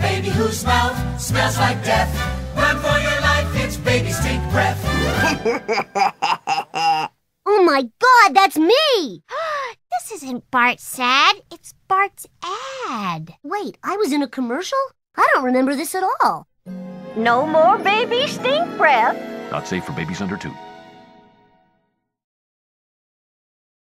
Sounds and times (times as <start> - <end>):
Music: 0.0 - 5.7, 16.6 - 22.2
Speech: 17.3 - 20.6.